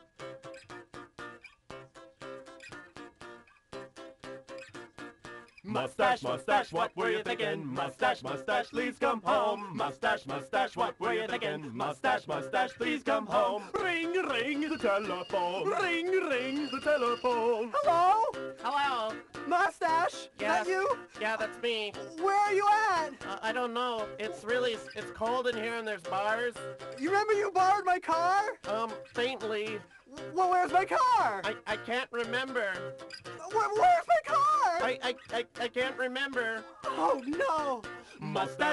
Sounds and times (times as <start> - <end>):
Music: 0.0 - 38.7
Ringtone: 13.3 - 19.3.